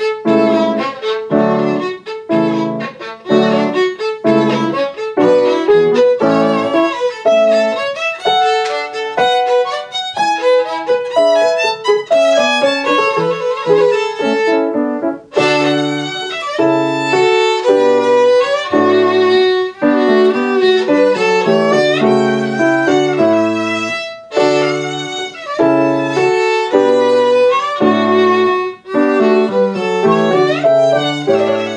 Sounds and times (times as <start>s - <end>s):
Violin, fiddle: 0.0s - 31.7s.